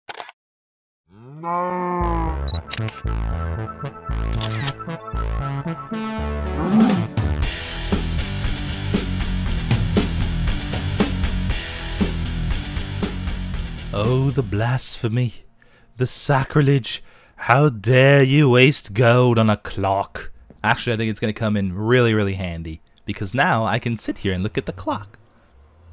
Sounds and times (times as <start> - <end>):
Music: 2.3 - 14.6.